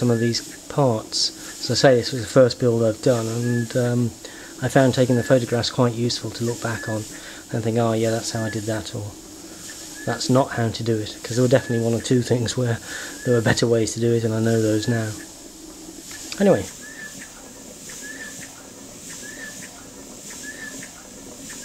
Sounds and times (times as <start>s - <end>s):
Speech: 0.0s - 9.2s, 10.1s - 15.3s, 16.4s - 16.8s.